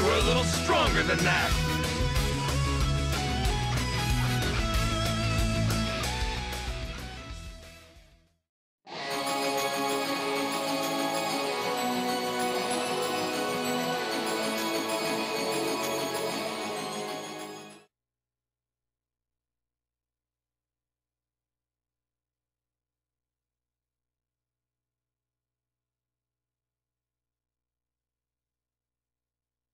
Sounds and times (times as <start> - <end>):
Music: 0.0 - 17.9.